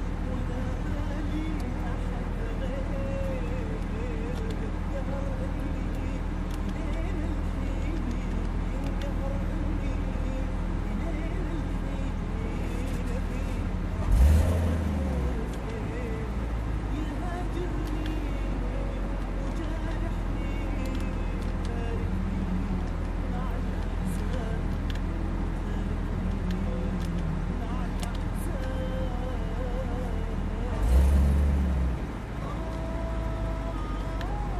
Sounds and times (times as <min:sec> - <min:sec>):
Vehicle: 0:00.0 - 0:34.5.